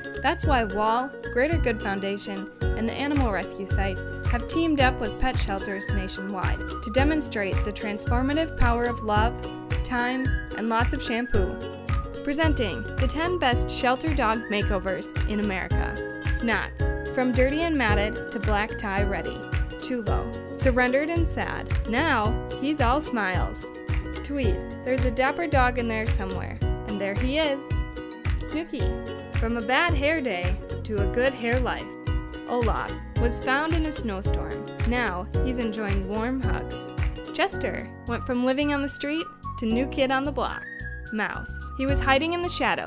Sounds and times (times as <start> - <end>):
Music: 0.0 - 42.8
Speech: 0.3 - 9.3, 9.9 - 11.6, 12.3 - 23.6, 24.3 - 27.8, 28.4 - 31.9, 32.5 - 42.8.